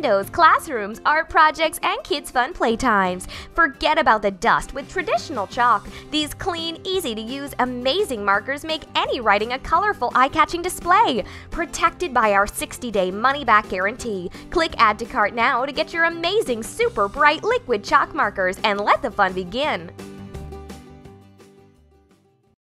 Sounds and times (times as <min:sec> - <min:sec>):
Speech: 0:00.0 - 0:19.9
Music: 0:00.0 - 0:22.6.